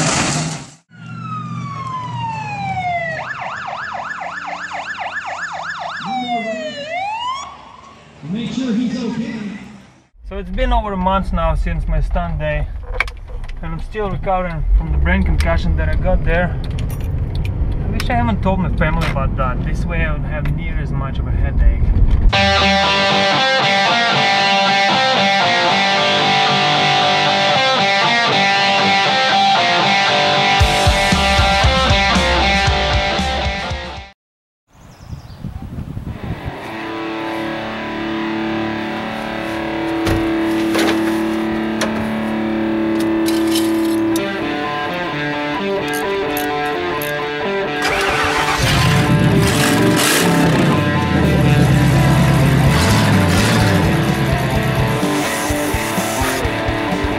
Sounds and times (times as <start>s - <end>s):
Music: 22.4s - 34.1s, 36.7s - 49.4s, 50.6s - 57.1s.